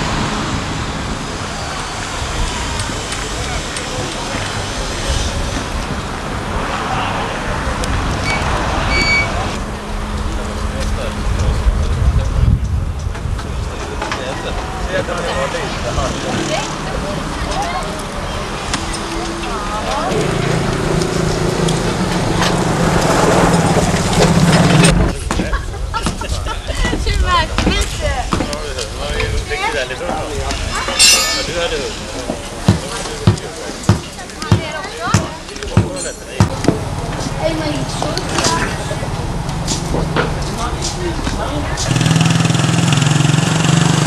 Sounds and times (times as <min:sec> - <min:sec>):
Vehicle: 0:00.0 - 0:44.0.